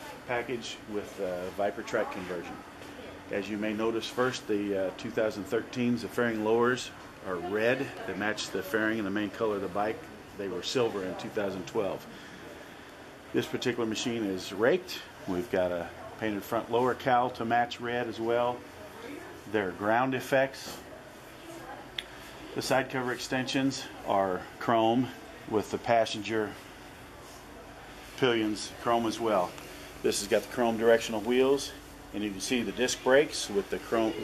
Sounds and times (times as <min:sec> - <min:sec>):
Speech: 0:00.0 - 0:12.3, 0:13.3 - 0:34.2.